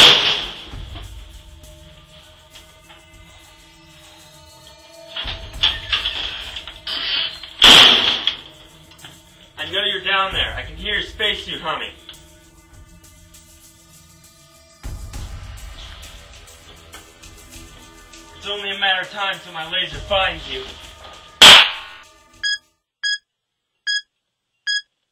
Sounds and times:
Music: 0:00.0 - 0:22.8
Speech: 0:09.6 - 0:12.0, 0:18.4 - 0:20.8.

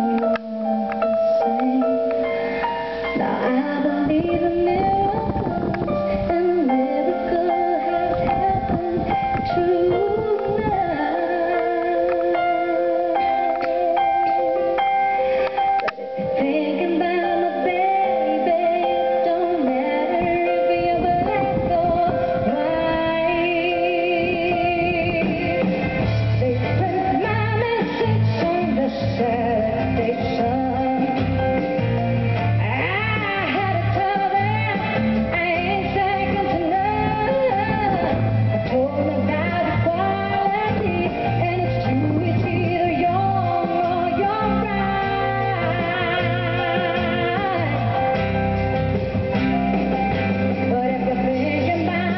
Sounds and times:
Inside, large room or hall: 0:00.0 - 0:52.1
Music: 0:00.0 - 0:52.1.

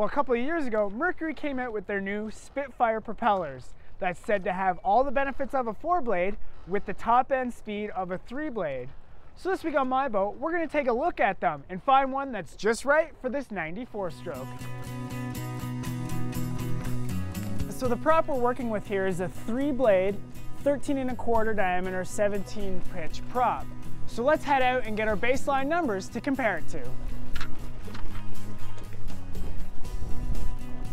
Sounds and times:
Speech: 0:00.0 - 0:14.5, 0:17.7 - 0:26.9
Music: 0:14.1 - 0:30.9.

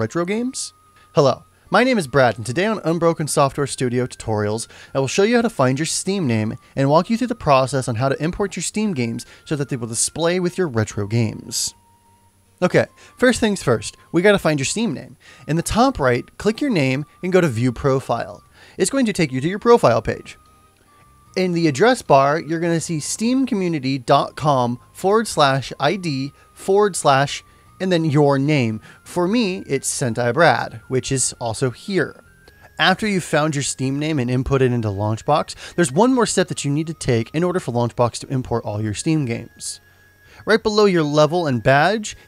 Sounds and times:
Speech: 0:00.0 - 0:11.8, 0:12.6 - 0:20.4, 0:21.4 - 0:32.2, 0:32.8 - 0:39.8, 0:40.5 - 0:42.2
Music: 0:00.0 - 0:42.2.

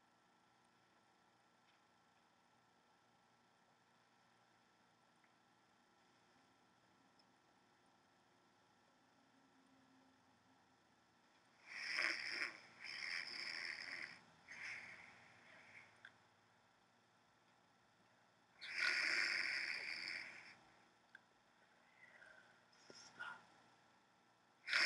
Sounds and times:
Inside, small room: 0:00.0 - 0:24.8.

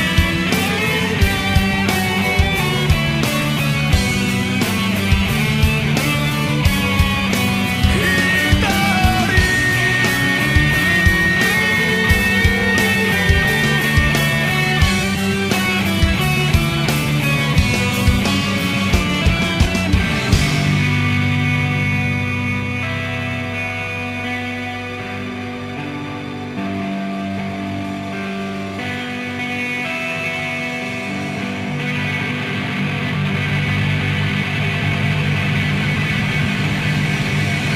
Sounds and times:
Music: 0:00.0 - 0:37.7
Singing: 0:07.9 - 0:13.4.

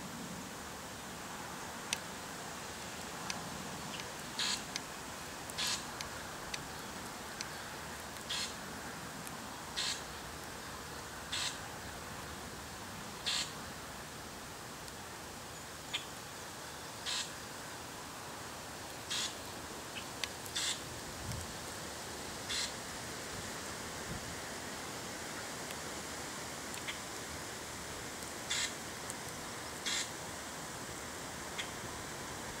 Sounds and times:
Animal: 0:08.3 - 0:08.6, 0:13.2 - 0:13.6, 0:17.0 - 0:17.3, 0:22.5 - 0:22.8, 0:28.5 - 0:28.8.

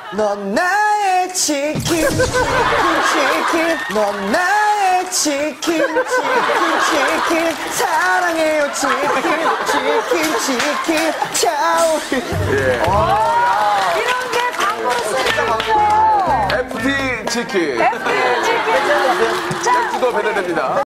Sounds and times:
Music: 0:12.3 - 0:13.4, 0:15.2 - 0:17.8.

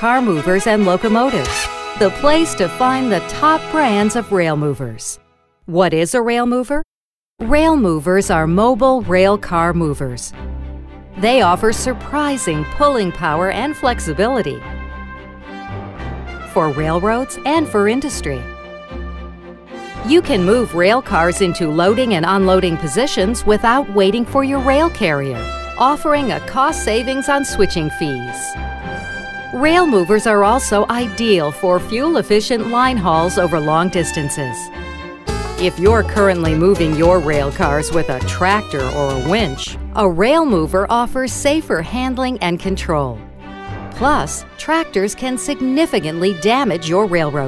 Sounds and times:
Music: 0:00.0 - 0:06.1, 0:07.4 - 0:47.4
Speech: 0:00.0 - 0:10.4, 0:11.2 - 0:14.6, 0:16.6 - 0:18.5, 0:20.0 - 0:28.5, 0:29.6 - 0:34.7, 0:35.6 - 0:43.2, 0:44.0 - 0:47.4.

